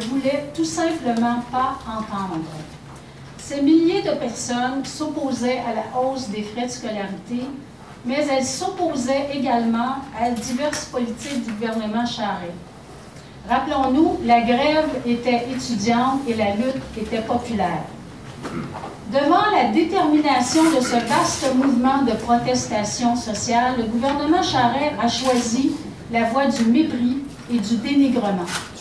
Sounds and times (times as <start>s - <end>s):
Female speech, woman speaking: 0.0s - 2.8s, 3.4s - 12.6s, 13.5s - 18.0s, 19.1s - 28.7s.